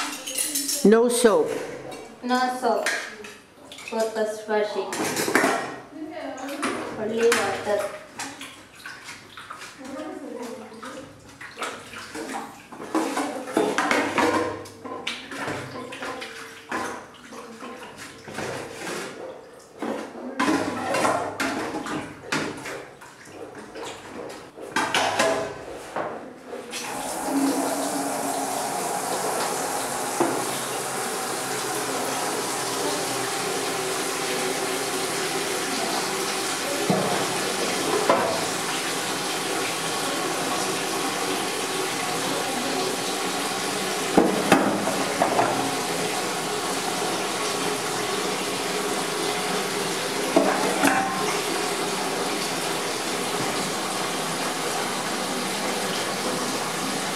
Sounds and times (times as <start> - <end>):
Dishes, pots, and pans: 12.8 - 17.0, 18.3 - 22.8, 23.5 - 26.2, 50.4 - 51.2.